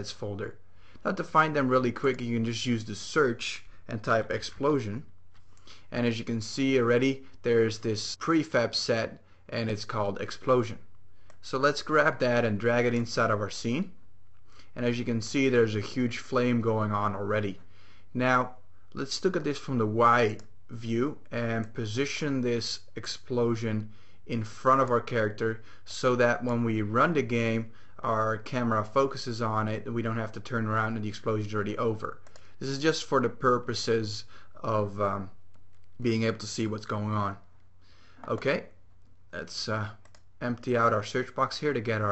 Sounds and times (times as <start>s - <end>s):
Speech: 0.0s - 5.1s, 5.9s - 14.0s, 14.8s - 35.4s, 36.0s - 37.5s, 38.2s - 42.1s.